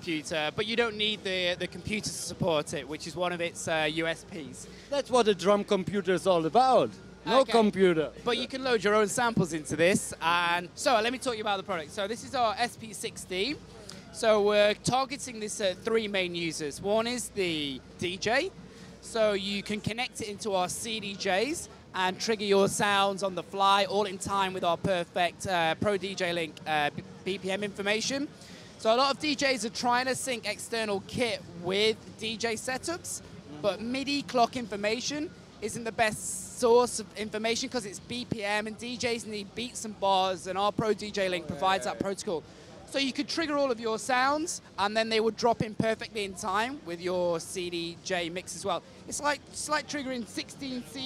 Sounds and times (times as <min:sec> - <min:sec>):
Speech: 0:00.0 - 0:51.0.